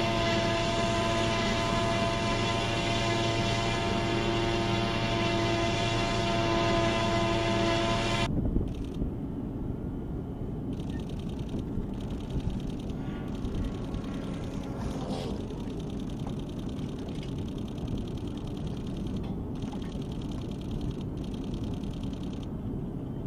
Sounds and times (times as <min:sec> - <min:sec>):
Outside, rural or natural: 0:00.0 - 0:23.2
Vehicle: 0:00.0 - 0:23.2.